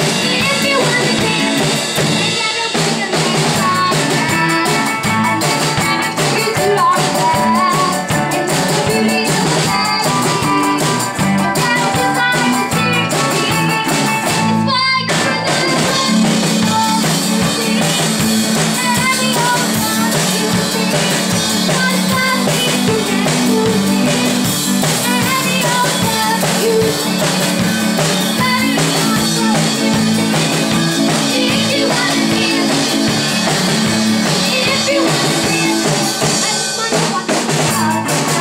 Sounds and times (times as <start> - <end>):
Rock and roll: 0.0 - 38.4.